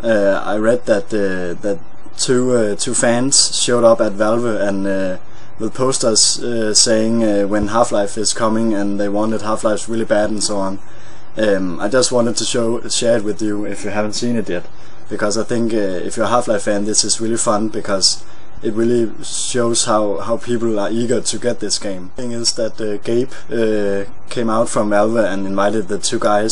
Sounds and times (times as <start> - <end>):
Speech: 0.0 - 26.5.